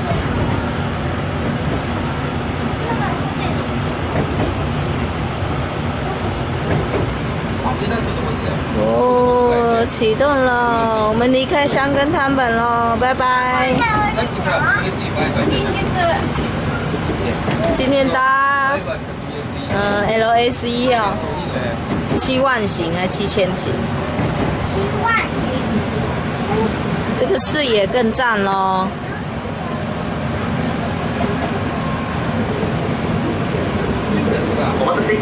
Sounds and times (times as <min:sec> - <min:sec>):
Vehicle: 0:00.0 - 0:35.2.